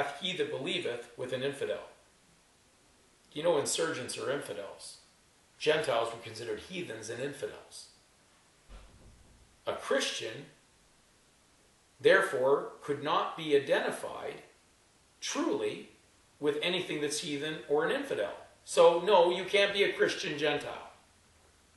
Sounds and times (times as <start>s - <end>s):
Speech: 0.0s - 2.0s, 3.3s - 7.9s, 9.7s - 10.6s, 12.0s - 14.5s, 15.2s - 21.0s
Inside, small room: 0.0s - 21.7s.